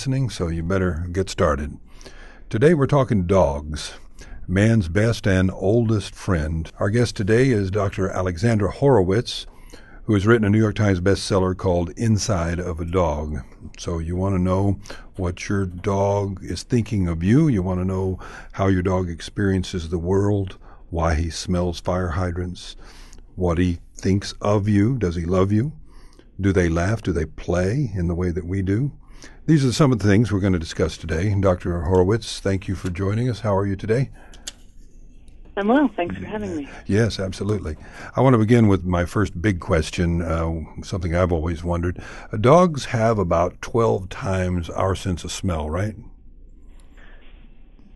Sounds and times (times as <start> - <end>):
Speech: 0.0 - 1.8, 2.5 - 22.8, 23.4 - 25.8, 26.4 - 34.2, 35.6 - 46.1.